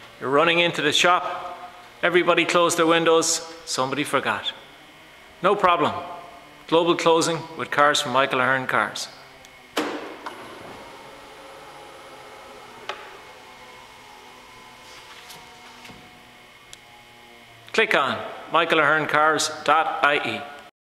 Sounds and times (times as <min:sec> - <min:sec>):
Speech: 0:00.2 - 0:04.6, 0:05.4 - 0:09.2, 0:17.7 - 0:20.6
Power windows, electric windows: 0:04.6 - 0:05.6, 0:09.2 - 0:17.7.